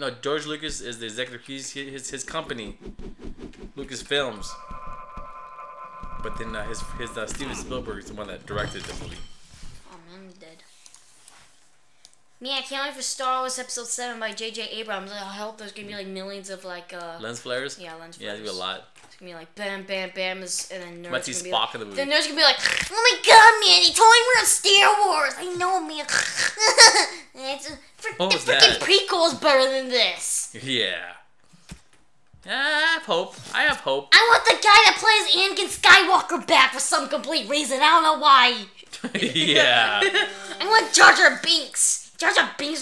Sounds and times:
Speech: 3.8s - 4.6s, 6.3s - 9.1s, 12.4s - 26.2s, 27.4s - 31.2s, 32.5s - 42.8s.

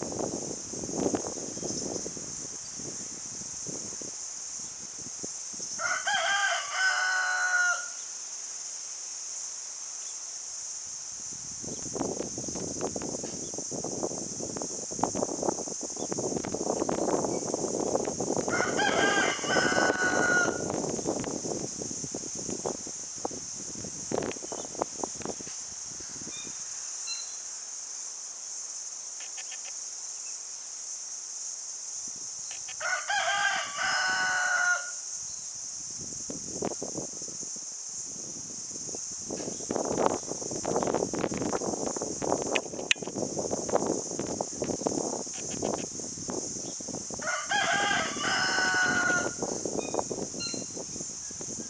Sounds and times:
Crowing, cock-a-doodle-doo: 5.7s - 8.0s, 18.5s - 20.7s, 32.8s - 35.1s, 47.2s - 49.6s.

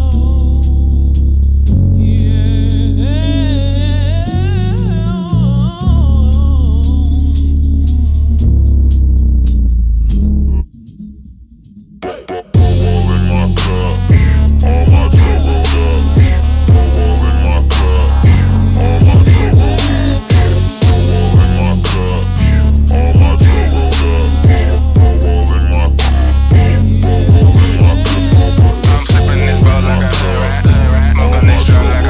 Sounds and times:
Hip hop music: 0.0s - 32.0s.

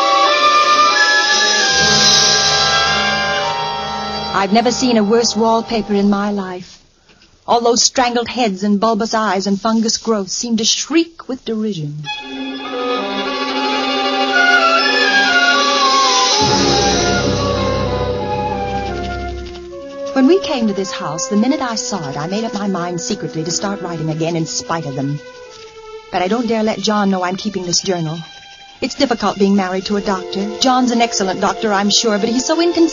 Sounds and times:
Music: 0.0s - 6.3s, 12.0s - 32.9s
Speech: 4.3s - 6.8s, 7.5s - 12.1s, 20.2s - 25.2s, 26.2s - 32.9s.

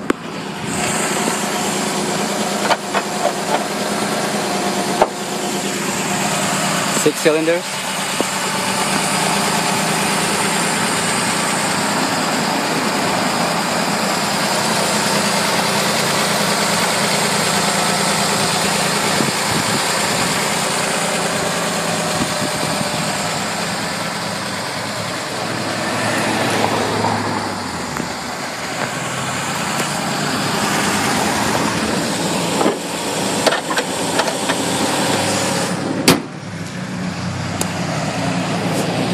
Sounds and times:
Car: 0.0s - 39.1s
Idling: 0.0s - 39.1s
Outside, urban or manmade: 0.0s - 39.1s
Speech: 6.9s - 7.8s.

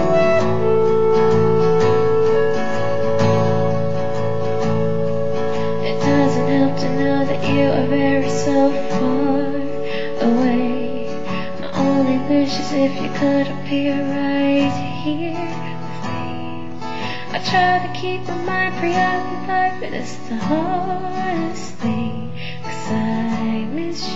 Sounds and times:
Guitar: 0.0s - 24.1s.

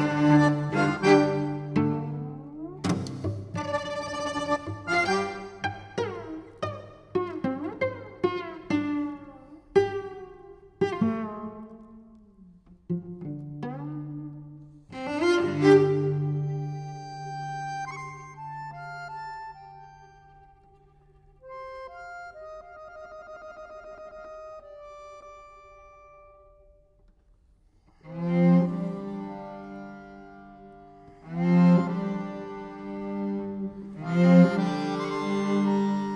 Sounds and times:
Accordion: 0.0s - 9.3s, 14.9s - 26.5s, 28.0s - 36.1s.

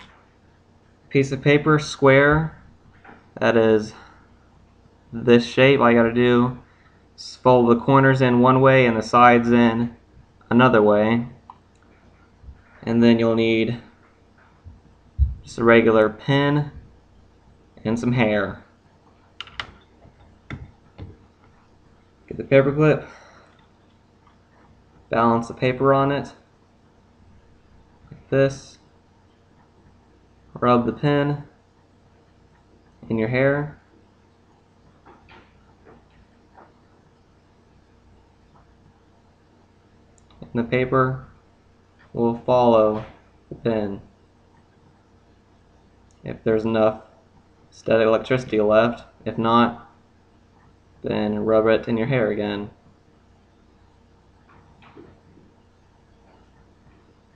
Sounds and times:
Speech: 1.1s - 2.6s, 3.4s - 4.1s, 5.1s - 11.4s, 12.8s - 14.0s, 15.5s - 16.9s, 17.8s - 18.7s, 22.3s - 23.2s, 25.1s - 26.5s, 28.2s - 28.9s, 30.6s - 31.6s, 33.0s - 33.8s, 40.4s - 41.4s, 42.2s - 44.1s, 46.2s - 47.2s, 47.8s - 50.0s, 51.0s - 52.8s.

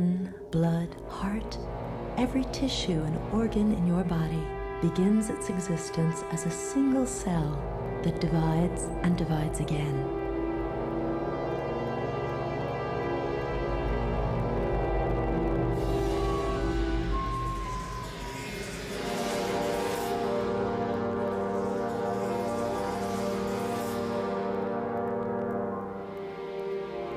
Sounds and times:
Speech: 0.0s - 1.6s, 2.2s - 10.1s
Music: 0.0s - 27.1s.

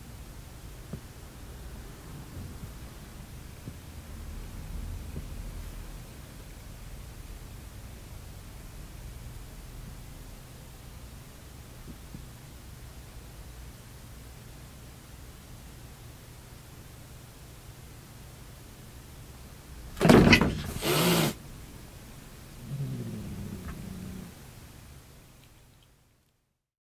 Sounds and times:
Hiss: 20.6s - 21.4s.

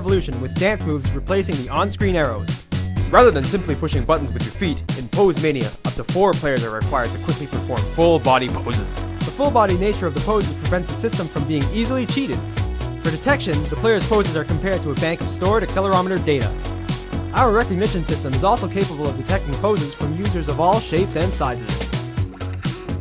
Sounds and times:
Speech: 0.0s - 2.5s, 3.1s - 12.4s, 13.1s - 16.6s, 17.4s - 21.8s
Music: 0.0s - 23.0s.

